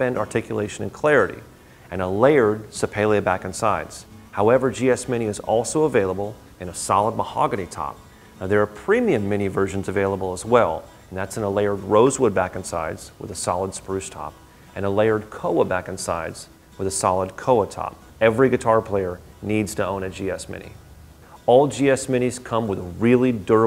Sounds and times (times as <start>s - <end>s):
Music: 0.0s - 23.6s
Speech: 0.0s - 23.6s.